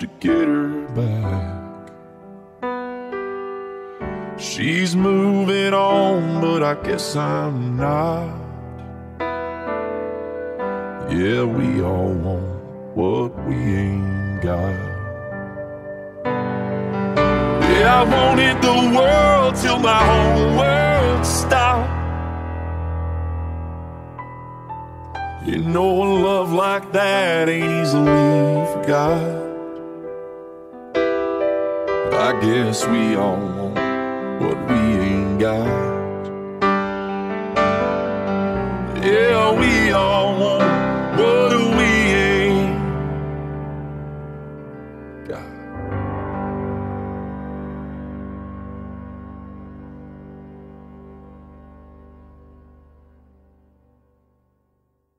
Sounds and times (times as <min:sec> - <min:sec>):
Electric piano: 0:00.0 - 0:54.2.